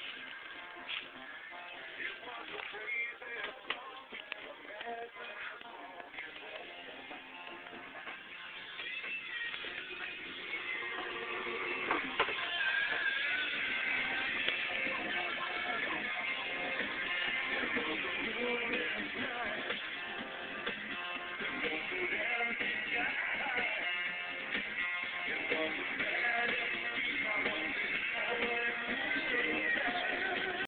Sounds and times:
Music: 0.0 - 30.6.

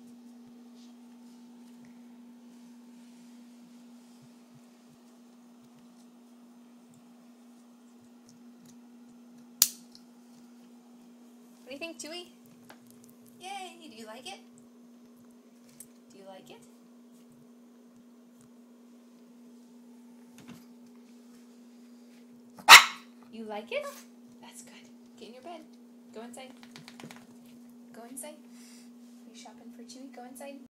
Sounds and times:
Speech: 11.6 - 12.4, 13.4 - 14.5, 16.1 - 16.7, 23.3 - 26.6, 27.9 - 28.4, 29.2 - 30.7
Bow-wow: 22.6 - 23.1
Yip: 22.6 - 23.1.

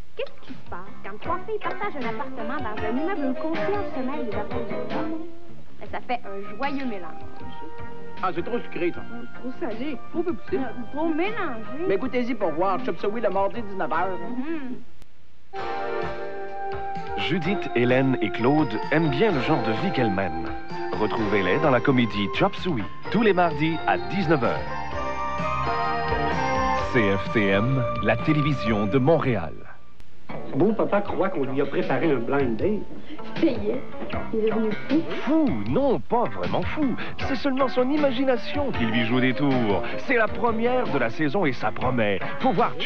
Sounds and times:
Music: 0.0 - 14.9, 15.5 - 42.8.

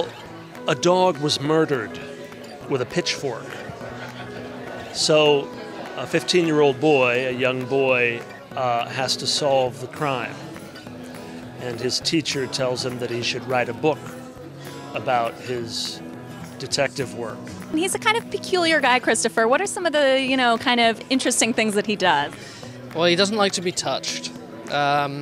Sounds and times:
Music: 0.0 - 25.2.

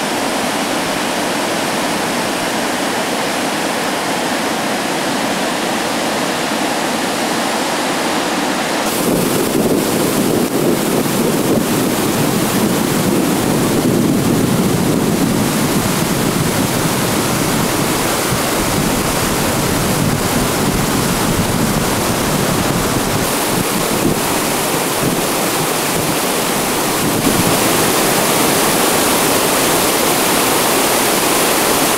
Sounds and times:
Rowboat, canoe, kayak: 0.0 - 31.9
Waterfall: 0.0 - 31.9.

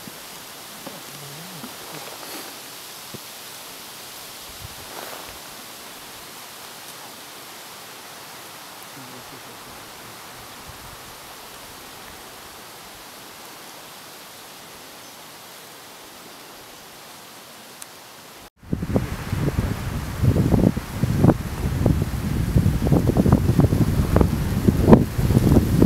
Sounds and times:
Rustling leaves: 0.0 - 25.8.

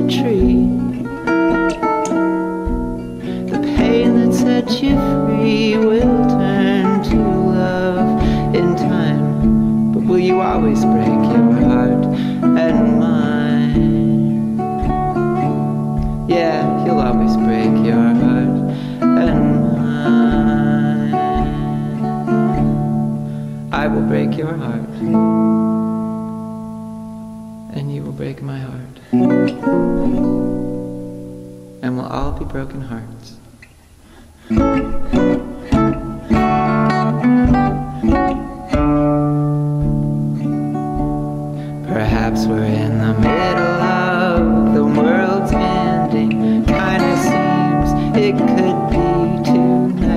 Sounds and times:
Speech: 0.0 - 0.9, 23.8 - 25.0, 27.7 - 29.0, 31.8 - 33.4
Music: 0.0 - 50.1.

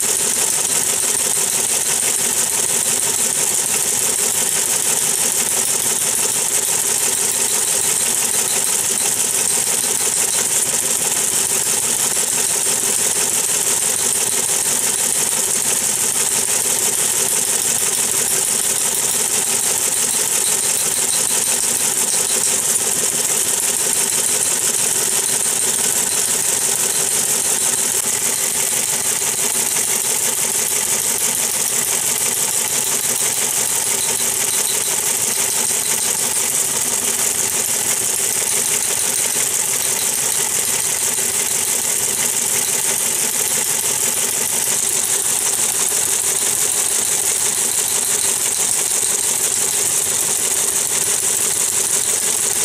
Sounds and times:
Typewriter: 0.0 - 52.6.

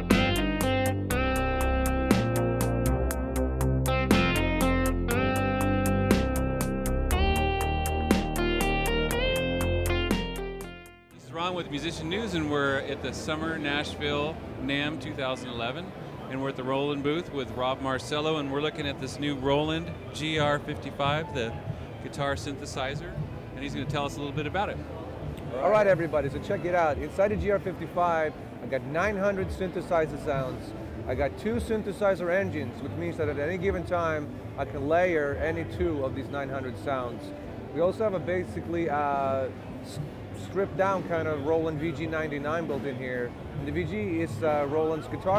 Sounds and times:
Speech: 11.2 - 24.8, 25.5 - 45.3.

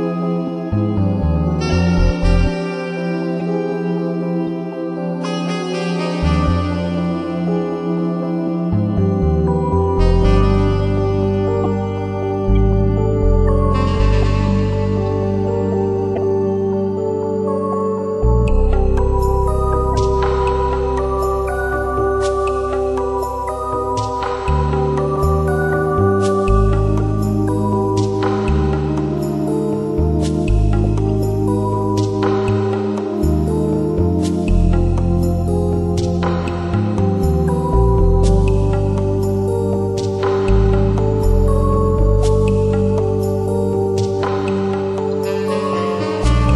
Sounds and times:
Music: 0.0 - 46.5.

